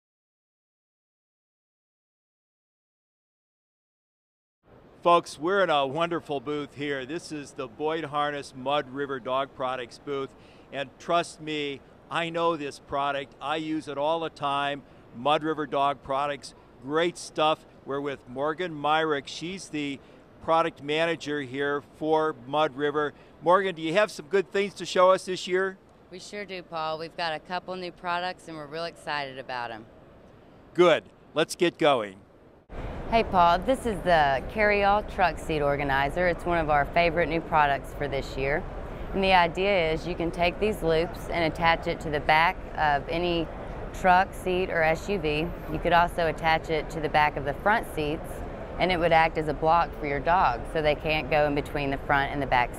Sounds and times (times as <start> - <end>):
Speech: 30.8 - 32.2, 33.1 - 38.6.